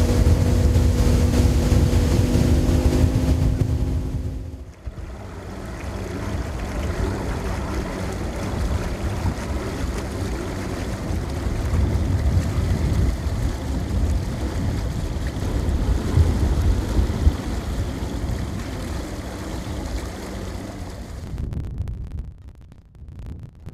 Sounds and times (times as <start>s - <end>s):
Outside, rural or natural: 0.0s - 23.7s.